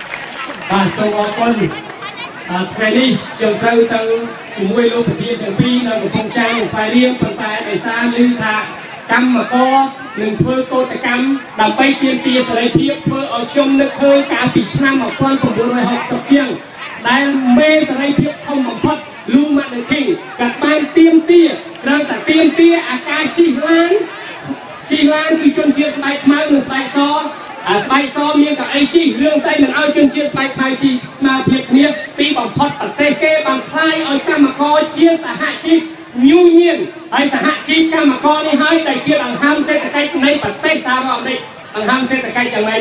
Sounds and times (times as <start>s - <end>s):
Narration, monologue: 0.6s - 42.8s
Male speech, man speaking: 0.7s - 1.8s, 2.5s - 42.8s.